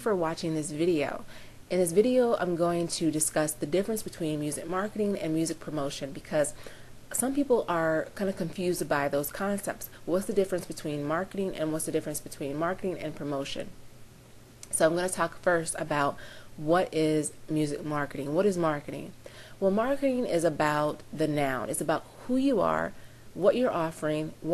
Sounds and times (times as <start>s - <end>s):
Speech: 0.0s - 13.8s, 14.7s - 24.5s.